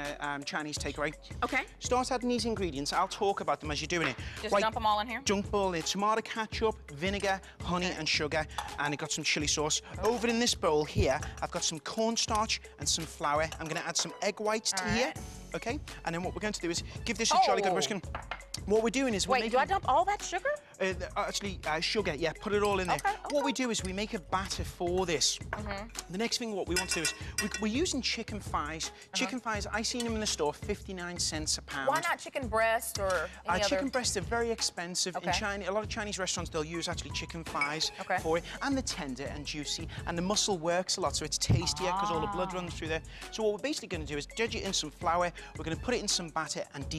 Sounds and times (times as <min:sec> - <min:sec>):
Speech: 0:00.0 - 0:18.0, 0:18.7 - 0:46.9
Music: 0:00.0 - 0:46.9.